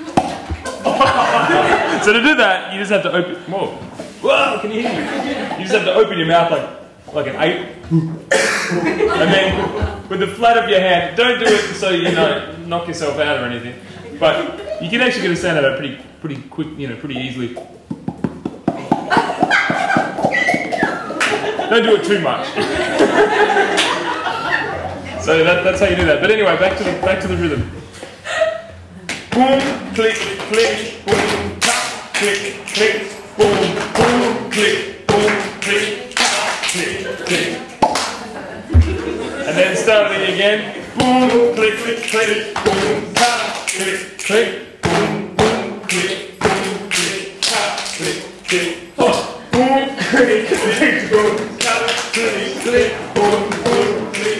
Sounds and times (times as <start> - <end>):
Percussion: 0.0 - 1.8, 17.0 - 21.6, 29.1 - 39.2, 41.0 - 54.3.